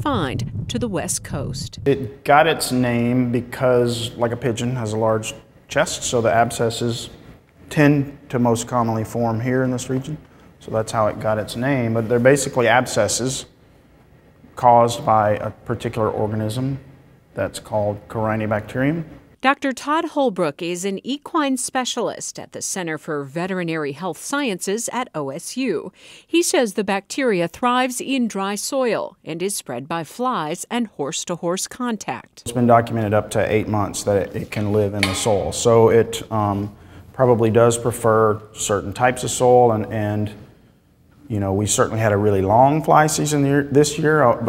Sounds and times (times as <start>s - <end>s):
Speech: 0.0s - 13.5s, 14.6s - 16.8s, 17.4s - 40.4s, 41.3s - 44.4s.